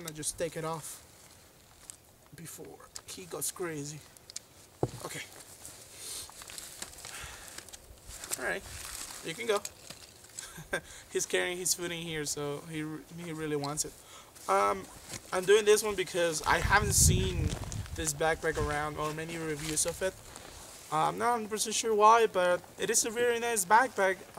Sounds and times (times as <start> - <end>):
Speech: 0.0 - 1.0, 2.4 - 4.0, 5.0 - 5.3, 8.4 - 8.6, 9.2 - 9.7, 11.2 - 20.2, 20.9 - 24.3.